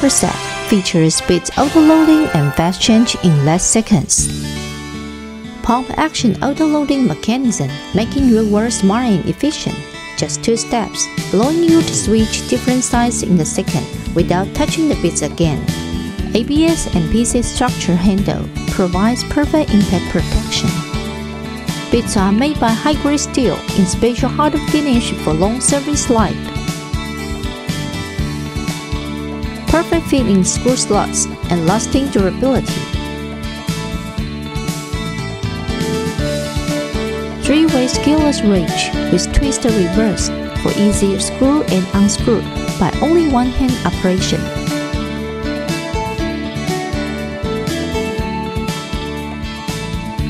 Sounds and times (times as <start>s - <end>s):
Speech: 0.0s - 4.3s, 5.6s - 15.7s, 16.4s - 20.8s, 21.9s - 26.5s, 29.7s - 32.9s, 37.4s - 44.5s
Music: 0.0s - 50.2s.